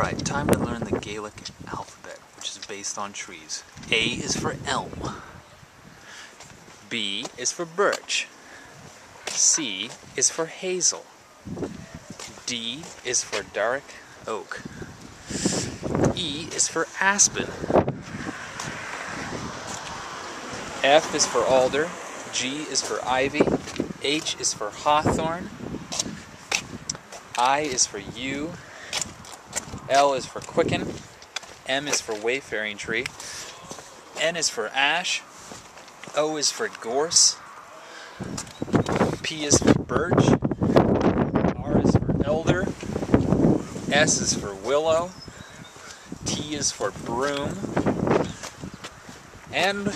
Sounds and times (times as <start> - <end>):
Speech: 0.0 - 5.3, 6.8 - 8.3, 9.3 - 11.1, 12.4 - 14.7, 16.1 - 17.6, 20.8 - 25.5, 27.4 - 28.6, 29.9 - 31.0, 31.7 - 35.3, 36.1 - 37.4, 39.2 - 40.4, 41.5 - 42.8, 43.9 - 45.2, 46.3 - 47.7, 49.5 - 49.9
Outside, rural or natural: 0.0 - 49.9.